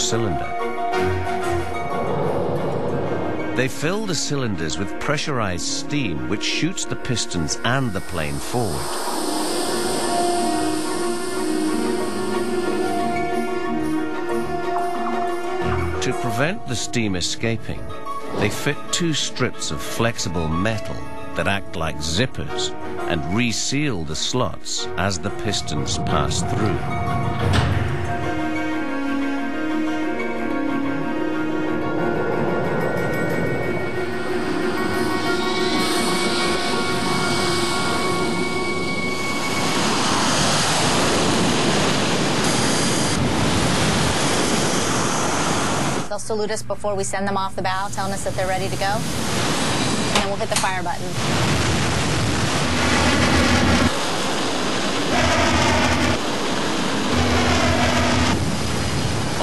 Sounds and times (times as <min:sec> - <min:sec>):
Wind: 0:26.4 - 0:46.1.